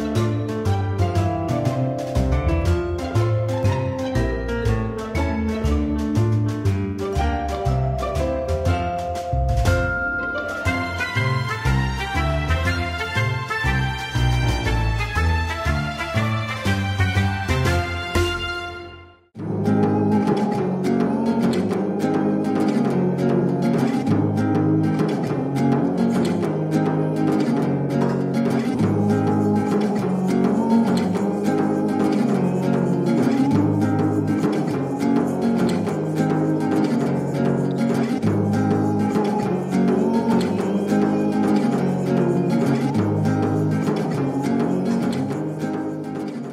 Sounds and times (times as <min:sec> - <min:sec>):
Music: 0:00.0 - 0:46.5
Singing: 0:19.4 - 0:46.2.